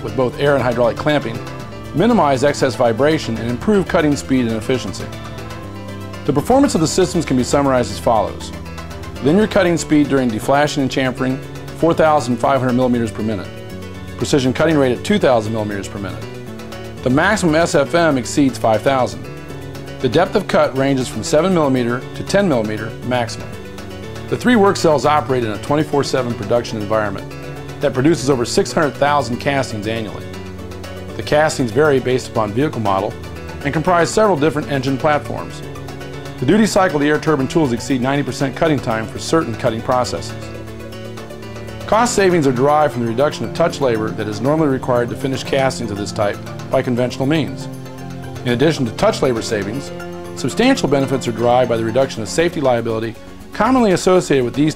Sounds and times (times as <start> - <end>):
Speech: 0.0 - 1.4, 2.0 - 5.2, 6.3 - 8.5, 9.2 - 13.5, 14.2 - 16.3, 17.0 - 19.3, 20.0 - 23.5, 24.3 - 30.3, 31.2 - 35.6, 36.4 - 40.5, 41.9 - 47.7, 48.4 - 54.7
Music: 0.0 - 54.7.